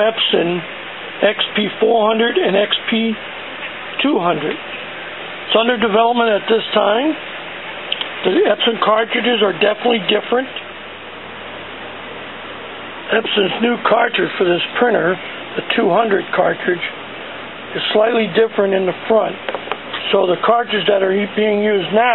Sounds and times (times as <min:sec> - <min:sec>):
Speech: 0:00.0 - 0:03.2, 0:04.0 - 0:04.6, 0:05.5 - 0:07.2, 0:08.2 - 0:10.7, 0:13.1 - 0:17.0, 0:17.7 - 0:19.4, 0:20.0 - 0:22.1.